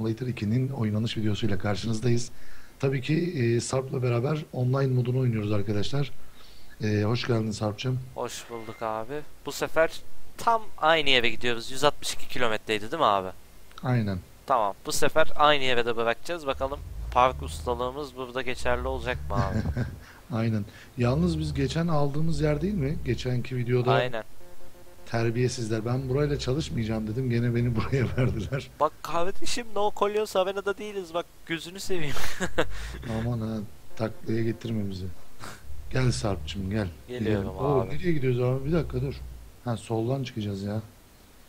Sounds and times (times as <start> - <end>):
Speech: 0.0 - 6.2, 6.8 - 24.3, 25.1 - 32.2, 33.0 - 35.2, 35.9 - 40.9.